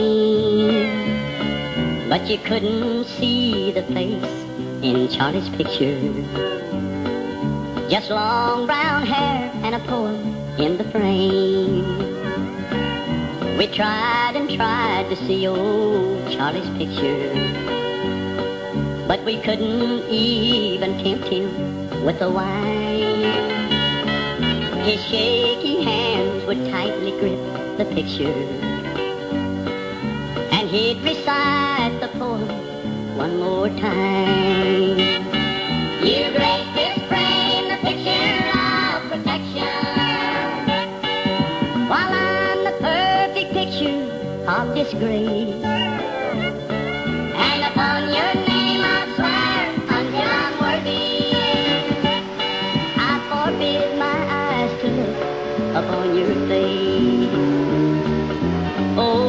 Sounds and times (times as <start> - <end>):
Music: 0.0 - 59.2.